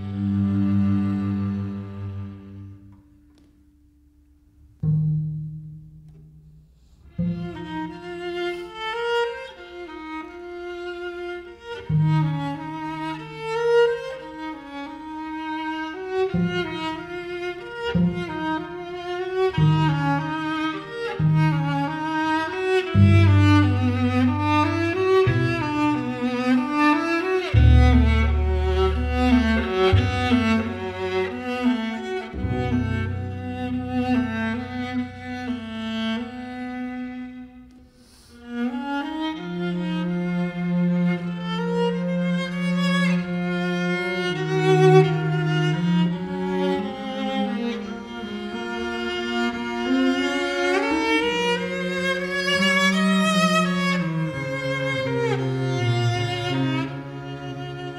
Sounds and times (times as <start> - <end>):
Violin, fiddle: 7.2 - 37.4, 38.0 - 57.9.